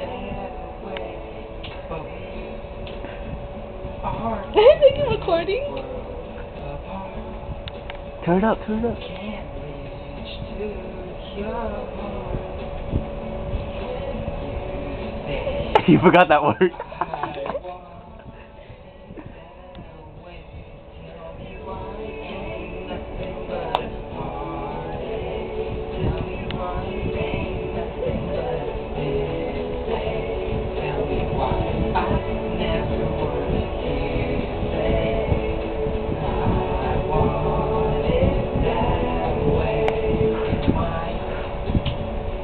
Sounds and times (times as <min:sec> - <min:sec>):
Choir: 0:00.0 - 0:02.7, 0:09.0 - 0:42.4
Male singing: 0:00.0 - 0:05.1, 0:05.7 - 0:42.1.